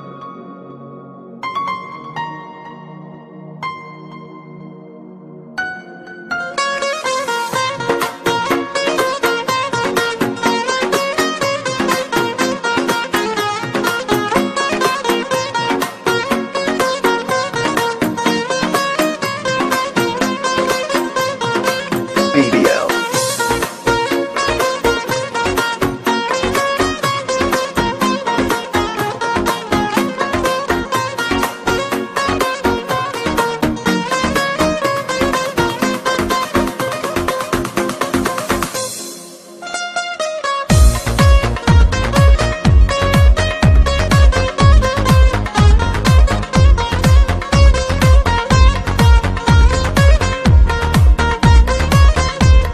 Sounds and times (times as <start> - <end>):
New-age music: 0.0 - 52.7
Dance music: 22.0 - 26.4, 40.7 - 52.7.